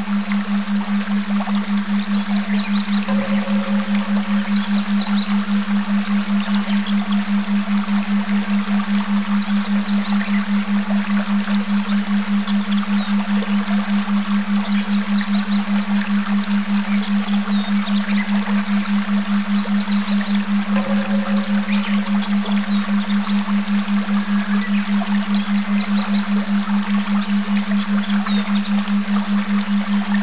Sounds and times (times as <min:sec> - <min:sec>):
Stream: 0:00.0 - 0:30.2.